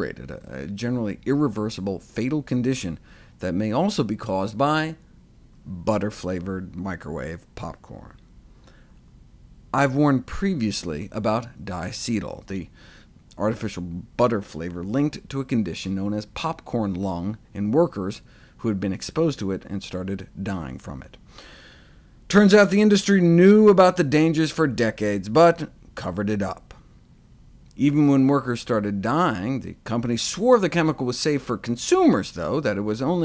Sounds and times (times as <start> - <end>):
Speech: 0.0 - 5.0, 5.6 - 8.2, 9.7 - 12.7, 13.3 - 21.2, 22.3 - 26.8, 27.7 - 33.2.